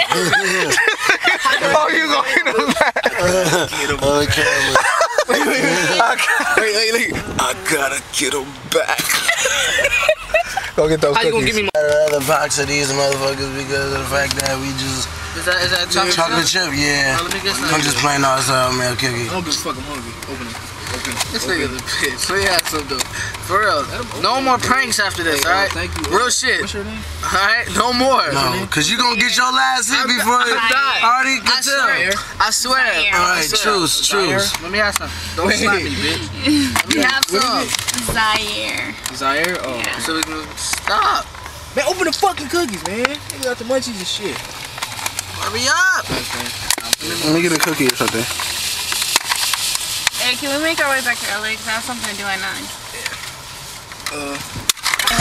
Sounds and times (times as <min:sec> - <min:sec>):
Outside, urban or manmade: 0:00.0 - 0:55.2
Vehicle: 0:00.0 - 0:55.2.